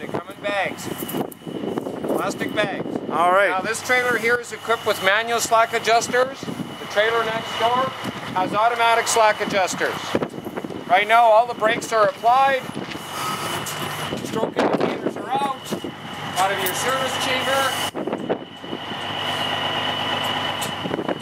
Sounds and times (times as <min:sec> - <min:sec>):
Speech: 0:00.0 - 0:00.9, 0:02.2 - 0:10.2, 0:10.9 - 0:12.7, 0:14.2 - 0:15.7, 0:16.4 - 0:17.8.